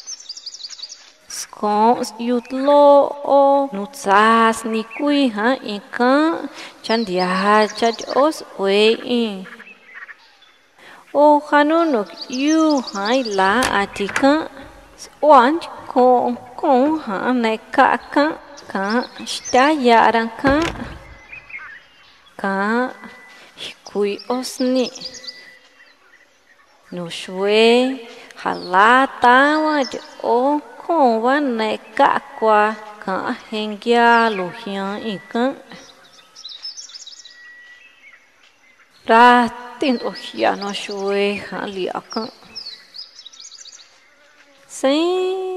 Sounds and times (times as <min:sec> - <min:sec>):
Chirp, tweet: 0:00.0 - 0:02.5, 0:06.4 - 0:10.8, 0:11.6 - 0:30.9, 0:31.6 - 0:44.3
Speech: 0:01.3 - 0:09.6, 0:10.8 - 0:21.0, 0:22.4 - 0:25.2, 0:26.9 - 0:35.8, 0:39.1 - 0:42.4, 0:44.7 - 0:45.5.